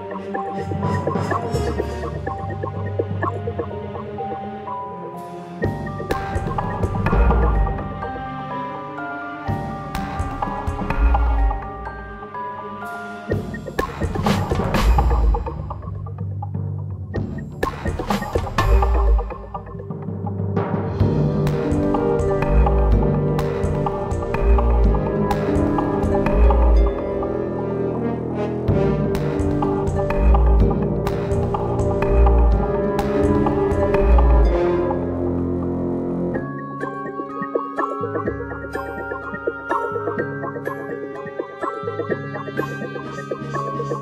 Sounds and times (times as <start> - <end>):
Music: 0.0 - 44.0.